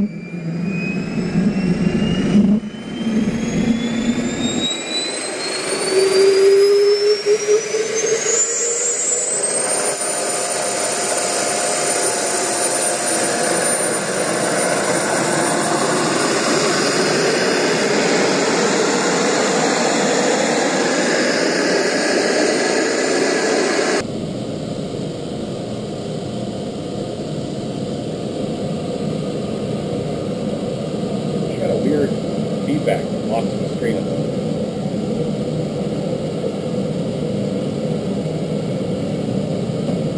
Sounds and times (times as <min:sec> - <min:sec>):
Aircraft: 0:00.0 - 0:40.1.